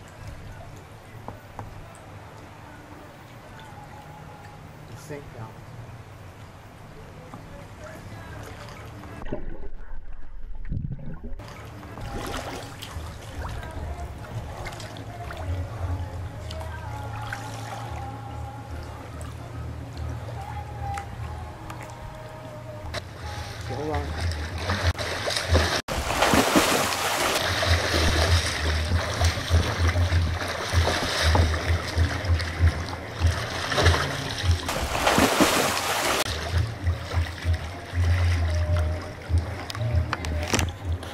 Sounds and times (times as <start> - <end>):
Music: 1.7 - 5.0, 11.4 - 25.8, 27.4 - 41.1.